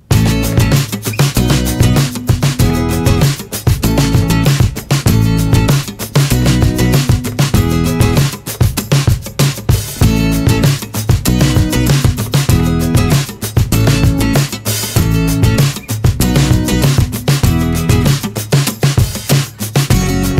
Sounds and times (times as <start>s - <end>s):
Music: 0.0s - 20.3s.